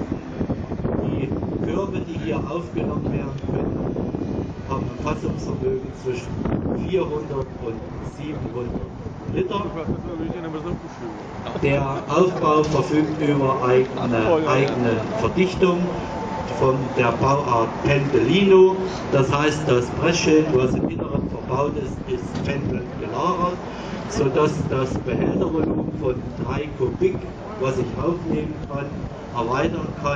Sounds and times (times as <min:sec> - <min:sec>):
Speech: 0:01.1 - 0:03.7, 0:04.7 - 0:30.1.